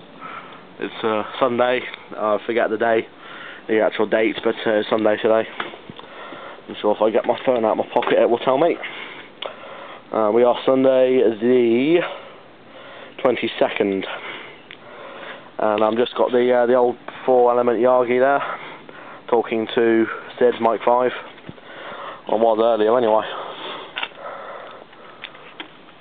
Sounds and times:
Speech: 0:00.8 - 0:03.1, 0:03.7 - 0:05.5, 0:06.7 - 0:08.8, 0:10.1 - 0:12.2, 0:13.2 - 0:14.2, 0:15.6 - 0:18.5, 0:19.3 - 0:21.2, 0:22.3 - 0:23.4.

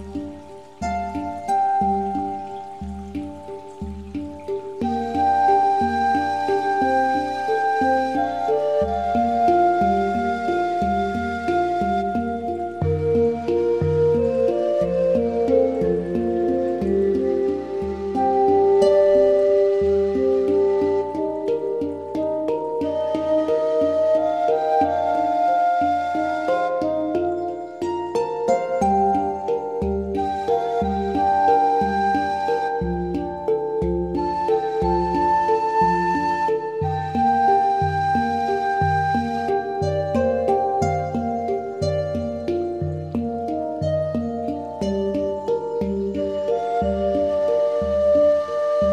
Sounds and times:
Music: 0:00.0 - 0:48.9.

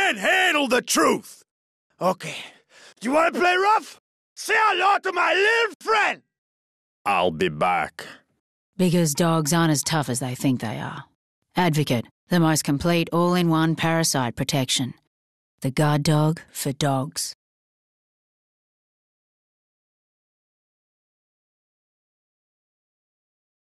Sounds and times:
Speech: 0:00.0 - 0:01.4, 0:02.0 - 0:06.2, 0:07.1 - 0:08.2, 0:08.8 - 0:15.0, 0:15.6 - 0:17.4.

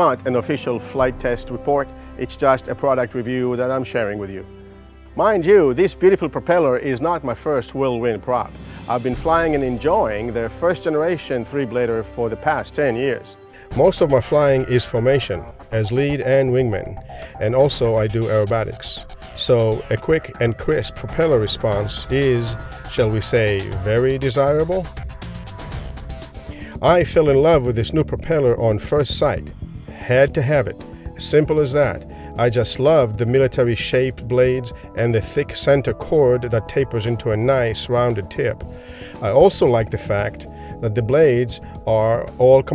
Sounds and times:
Speech: 0:00.0 - 0:04.5, 0:05.2 - 0:24.9, 0:26.8 - 0:38.6, 0:39.2 - 0:42.7
Music: 0:00.0 - 0:42.7.

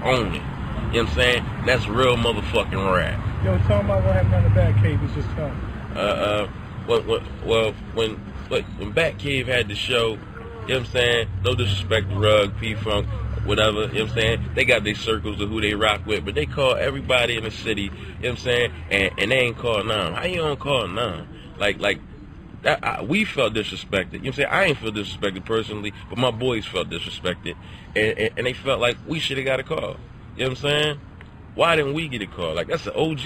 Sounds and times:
Speech: 0:00.0 - 0:22.0, 0:22.6 - 0:31.0, 0:31.6 - 0:33.2.

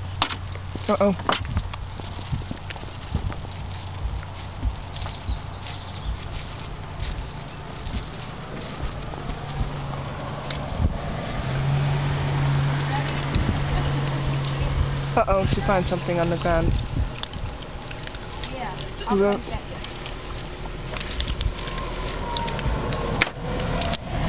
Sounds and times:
Vehicle: 0:00.0 - 0:24.2
Speech: 0:14.6 - 0:16.8.

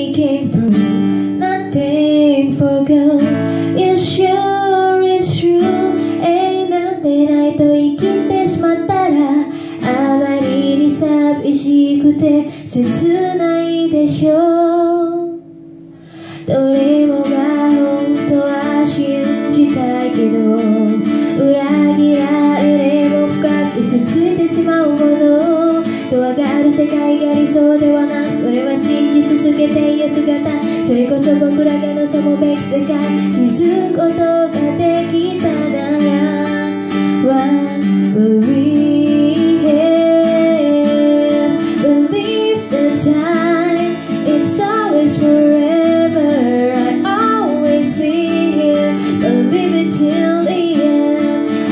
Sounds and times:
Music: 0:00.0 - 0:51.7.

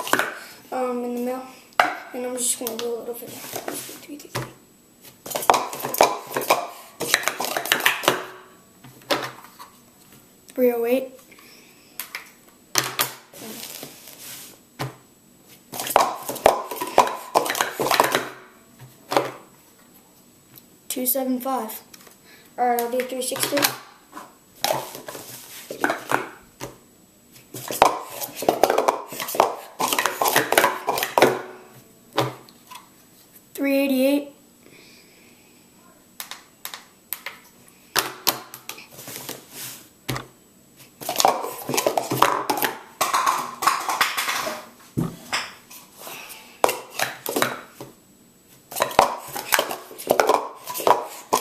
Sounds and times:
Inside, small room: 0:00.0 - 0:51.4
Speech: 0:00.7 - 0:04.4, 0:10.6 - 0:11.2, 0:20.9 - 0:21.9, 0:22.6 - 0:23.8, 0:33.6 - 0:34.4.

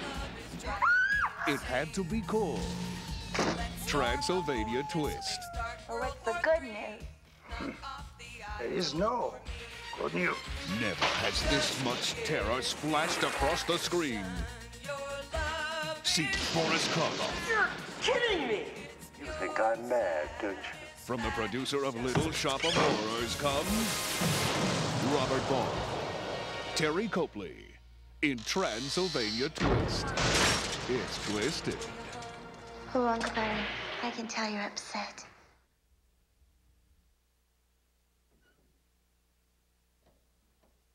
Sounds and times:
Music: 0:00.0 - 0:24.4, 0:25.1 - 0:33.8.

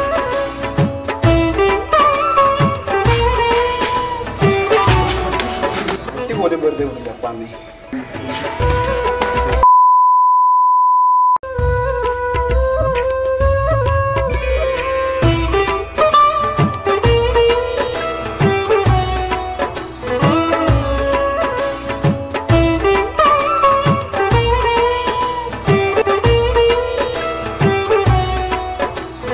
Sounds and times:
Sitar: 0:00.0 - 0:09.6, 0:14.3 - 0:29.3
Speech: 0:05.8 - 0:08.4.

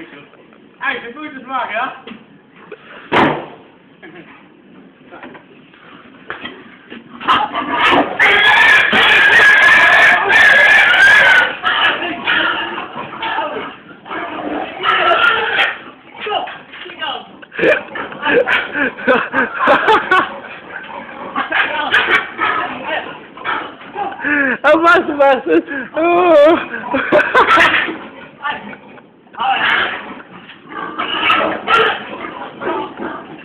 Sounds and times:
Oink: 0:07.1 - 0:16.0, 0:17.6 - 0:18.9, 0:19.7 - 0:24.0, 0:26.6 - 0:33.4.

